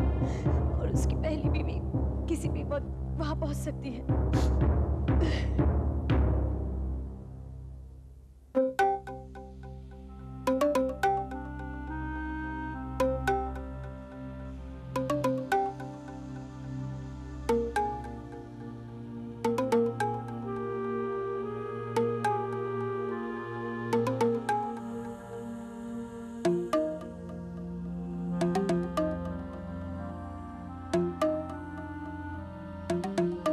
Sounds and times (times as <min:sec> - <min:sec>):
Speech: 0:00.7 - 0:04.1
Timpani: 0:04.0 - 0:07.9.